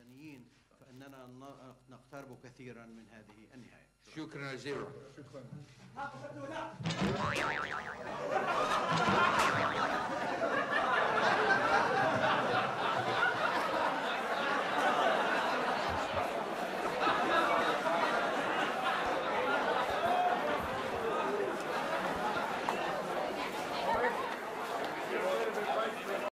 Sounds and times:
Speech: 0.0 - 6.8, 22.7 - 26.3.

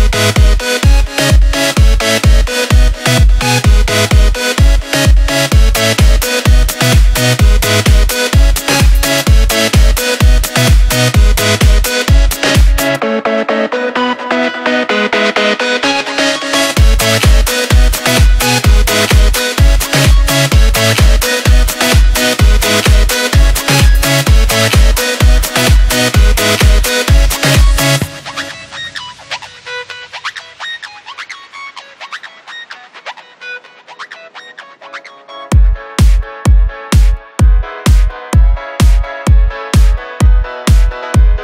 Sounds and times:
Music: 0.0 - 41.4.

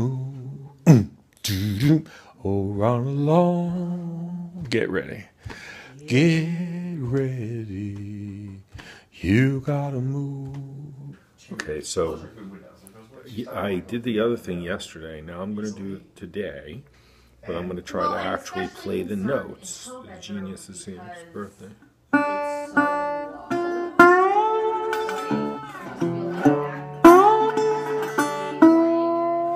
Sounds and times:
Acoustic guitar: 0.0 - 12.4, 16.9 - 29.5
Strum: 22.1 - 29.5.

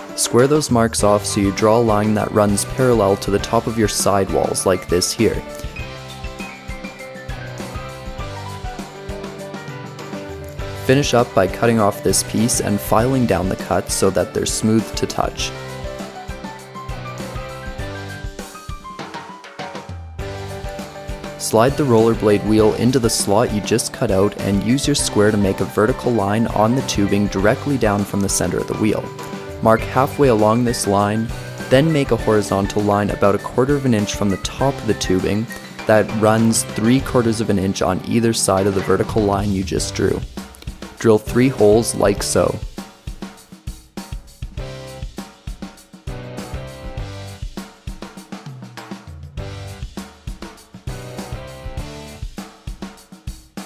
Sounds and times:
Music: 0.0 - 53.6
Speech: 0.2 - 5.5, 10.8 - 15.5, 21.4 - 40.3, 41.0 - 42.7.

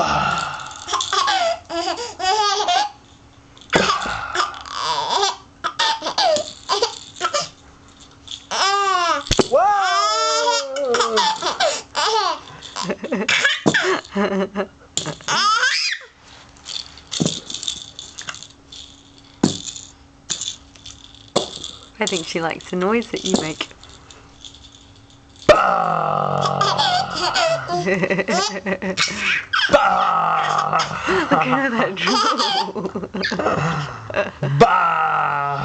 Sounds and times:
Laughter: 12.8 - 15.2, 27.8 - 29.1, 31.0 - 34.6
Speech: 22.0 - 23.7, 31.4 - 32.2.

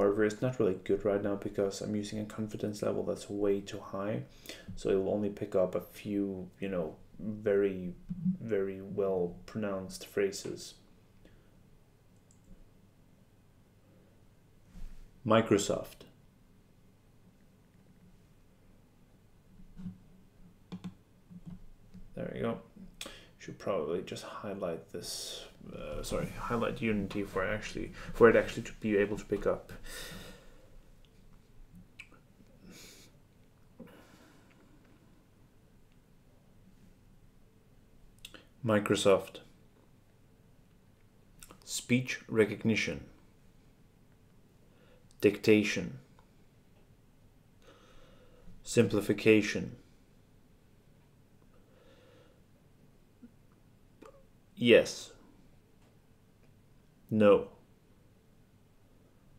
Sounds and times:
Male speech, man speaking: 0.0 - 10.8, 15.3 - 16.1, 22.2 - 22.7, 23.4 - 29.8, 38.6 - 39.5, 41.6 - 43.1, 45.2 - 46.0, 48.7 - 49.8, 54.6 - 55.2, 57.1 - 57.6
Narration, monologue: 0.0 - 14.0, 14.7 - 16.4, 19.3 - 34.9, 38.0 - 50.1, 53.2 - 57.8.

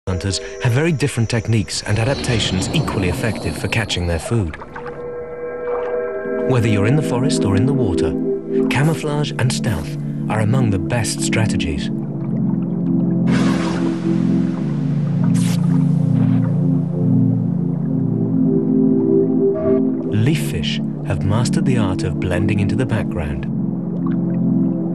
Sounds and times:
Speech: 0.0 - 4.6, 6.4 - 11.9, 20.1 - 23.5
Music: 0.1 - 24.9.

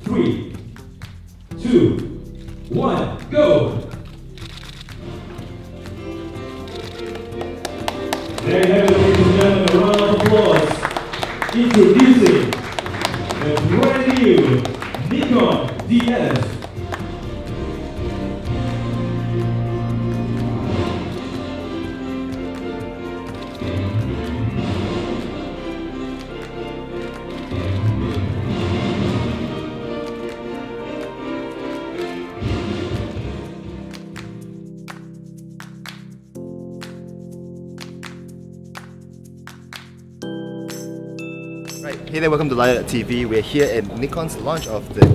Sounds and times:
Music: 0.0 - 45.1
Speech: 2.7 - 3.9, 8.5 - 10.8, 11.6 - 12.5, 13.4 - 16.6, 41.7 - 45.1.

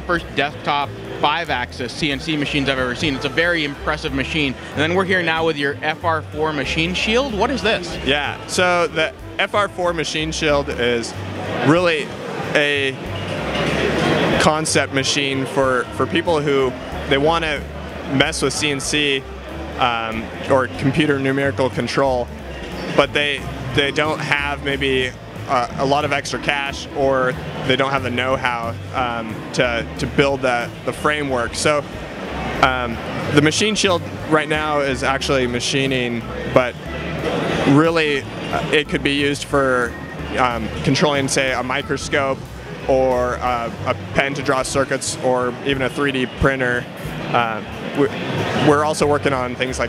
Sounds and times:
Speech: 0.0 - 13.0, 14.3 - 19.2, 19.8 - 22.3, 23.0 - 31.8, 32.6 - 36.8, 37.7 - 49.8
Music: 0.0 - 49.8.

